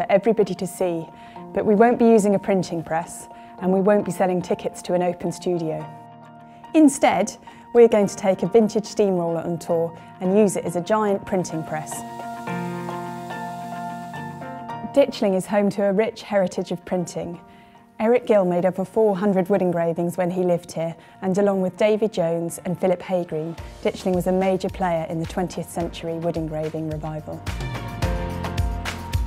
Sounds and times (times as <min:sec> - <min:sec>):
Speech: 0:00.0 - 0:05.8, 0:06.8 - 0:12.0, 0:14.9 - 0:17.4, 0:18.0 - 0:27.4
Music: 0:00.0 - 0:29.2.